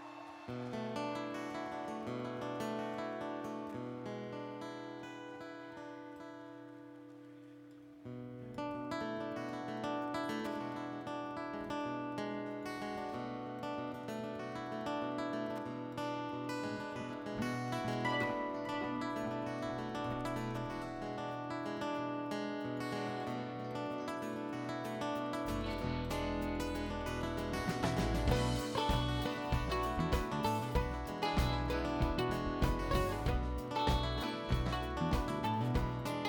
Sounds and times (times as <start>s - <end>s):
Rhythm and blues: 17.9s - 21.8s, 22.8s - 36.2s
Jazz: 25.4s - 36.2s.